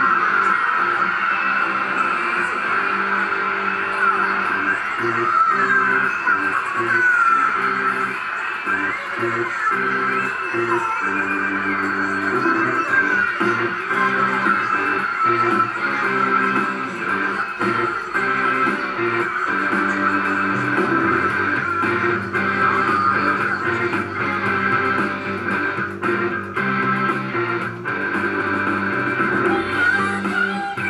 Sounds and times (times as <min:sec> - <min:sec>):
Music: 0:00.0 - 0:30.8
Synthetic singing: 0:04.8 - 0:25.4, 0:29.4 - 0:30.8.